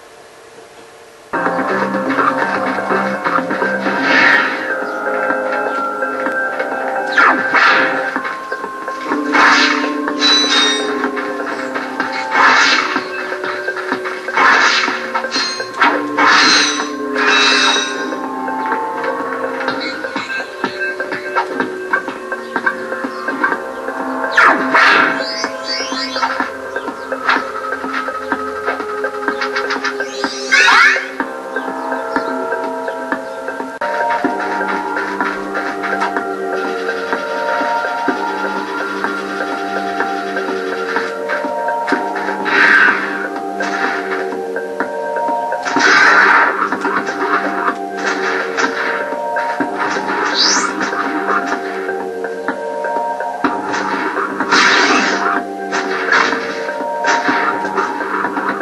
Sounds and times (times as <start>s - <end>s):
Music: 0.0s - 58.6s.